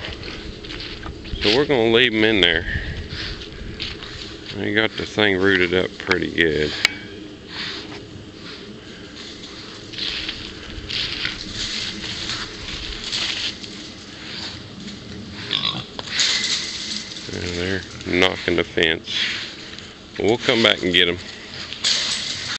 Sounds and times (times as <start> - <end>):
Speech: 1.4 - 2.8, 4.5 - 6.8, 17.3 - 19.2, 20.2 - 21.2
Oink: 15.4 - 16.4.